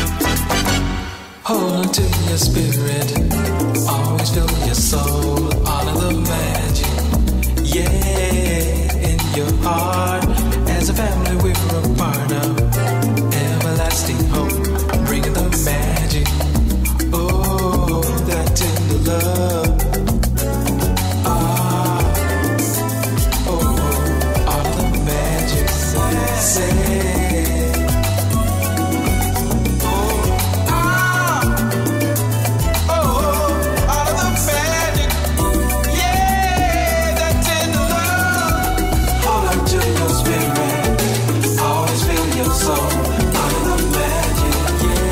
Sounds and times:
Music: 0.0 - 45.1.

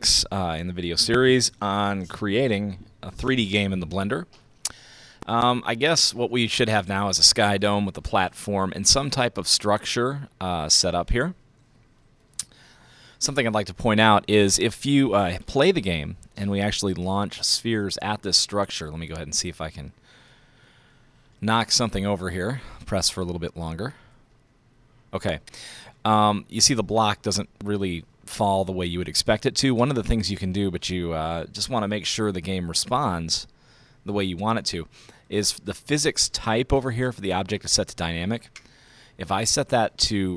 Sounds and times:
Speech: 0.0 - 4.3, 5.2 - 11.4, 13.2 - 20.0, 21.4 - 24.0, 25.2 - 33.5, 34.1 - 38.5, 39.2 - 40.3.

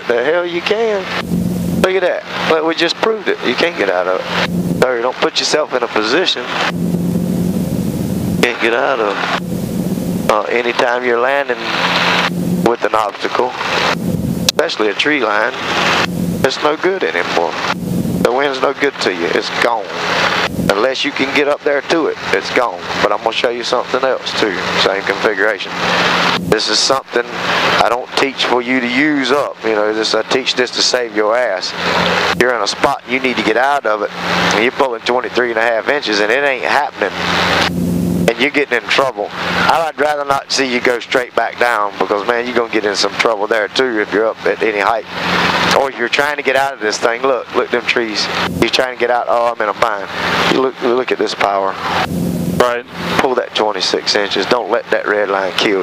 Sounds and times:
Wind noise (microphone): 13.9 - 14.6, 20.4 - 20.7.

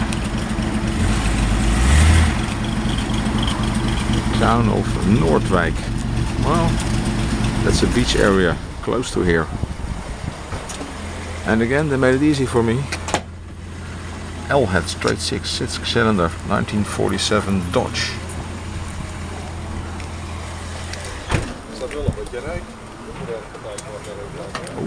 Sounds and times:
Truck: 0.0 - 24.8
Speech: 4.3 - 6.8, 7.6 - 9.5, 11.5 - 12.9, 14.5 - 18.2, 21.7 - 24.8.

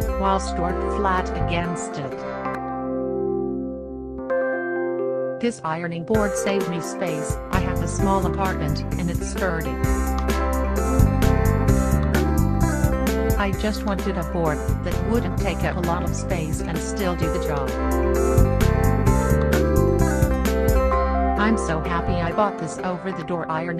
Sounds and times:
Music: 0.0 - 23.7
Speech: 0.1 - 2.2, 5.4 - 9.8, 13.4 - 17.7, 21.4 - 23.7.

